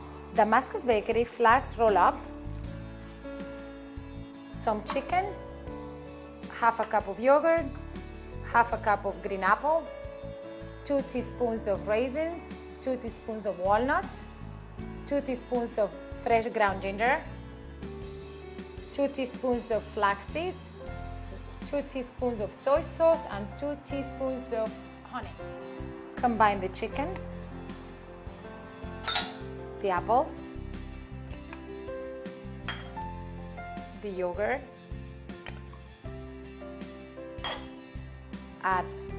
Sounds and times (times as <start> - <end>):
Music: 0.0 - 39.1
Speech: 0.4 - 2.2, 4.6 - 5.4, 6.5 - 7.7, 8.5 - 9.9, 10.9 - 14.2, 19.0 - 20.6, 21.6 - 25.4, 26.2 - 27.2, 29.8 - 30.6, 34.0 - 34.7, 38.6 - 38.9.